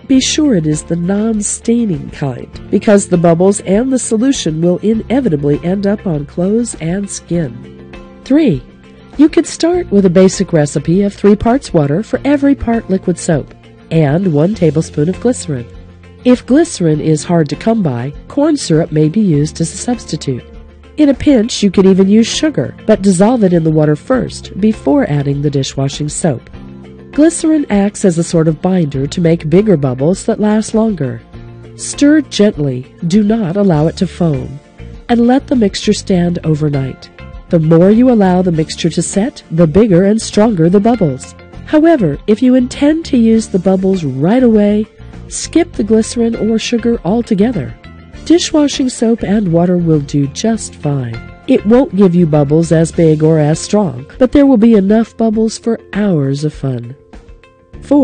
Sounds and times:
Narration, monologue: 0.0s - 58.0s.

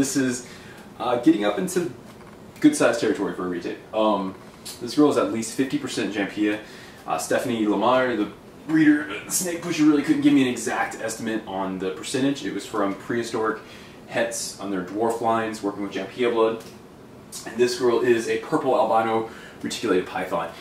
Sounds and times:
Speech: 0.0s - 2.0s, 2.6s - 16.8s, 17.4s - 20.6s
Inside, small room: 0.0s - 20.6s.

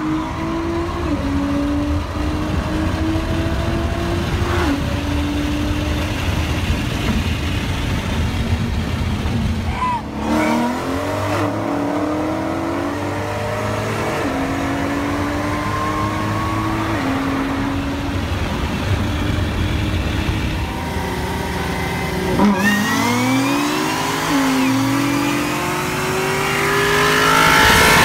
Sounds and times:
Race car, auto racing: 0.0s - 28.0s.

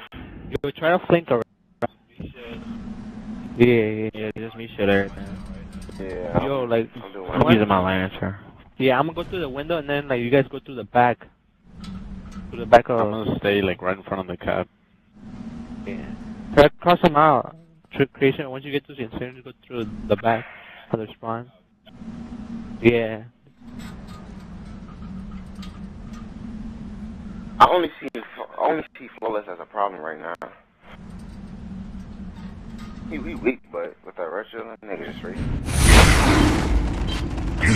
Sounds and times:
Speech: 0.6s - 1.4s, 2.2s - 2.6s, 3.6s - 11.3s, 12.6s - 14.7s, 15.9s - 21.6s, 22.8s - 23.3s, 27.6s - 30.6s, 33.1s - 37.7s.

